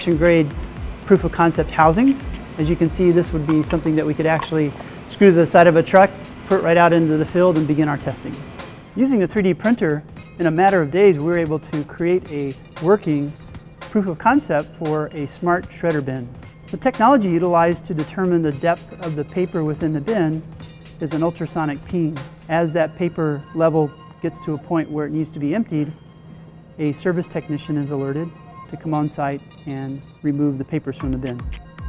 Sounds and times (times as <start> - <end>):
Speech: 0.0 - 0.5, 1.1 - 8.4, 9.0 - 20.4, 21.0 - 26.0, 26.8 - 31.5
Music: 0.0 - 31.8.